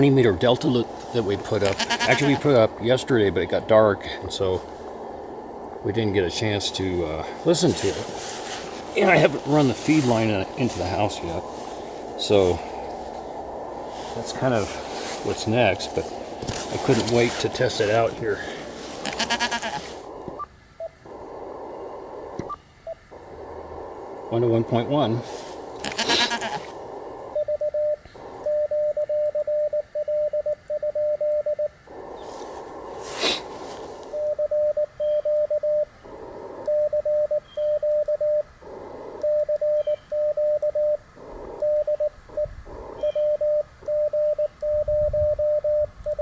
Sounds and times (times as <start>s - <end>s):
Speech: 0.0s - 4.6s, 5.9s - 8.1s, 9.0s - 11.4s, 12.2s - 12.6s, 14.2s - 16.1s, 16.7s - 18.5s, 24.3s - 25.3s
Sheep: 1.6s - 2.5s, 19.0s - 19.9s, 25.8s - 26.7s.